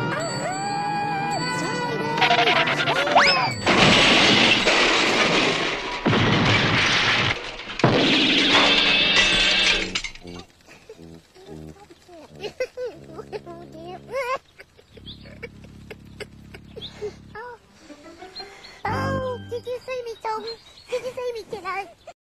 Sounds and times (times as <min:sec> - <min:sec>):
Music: 0:00.0 - 0:03.7, 0:10.2 - 0:14.2, 0:18.0 - 0:19.7
Speech: 0:13.1 - 0:14.4, 0:18.9 - 0:22.0.